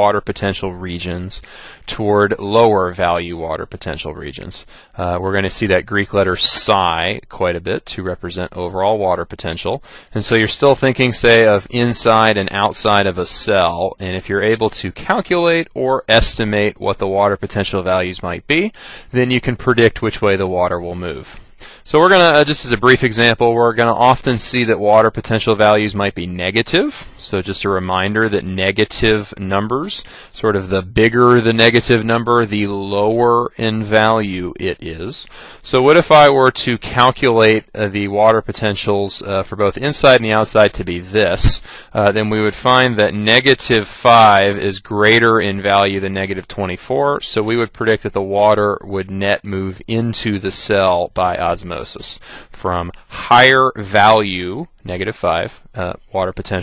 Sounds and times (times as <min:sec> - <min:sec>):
Speech: 0:00.0 - 0:56.6.